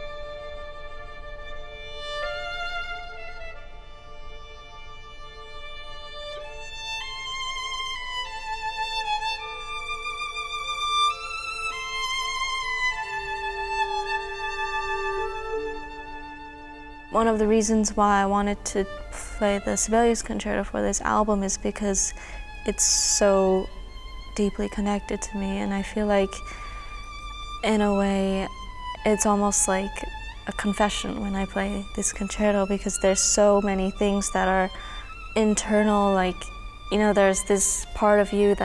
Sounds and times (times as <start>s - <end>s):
Violin, fiddle: 0.0s - 20.2s, 21.4s - 38.6s.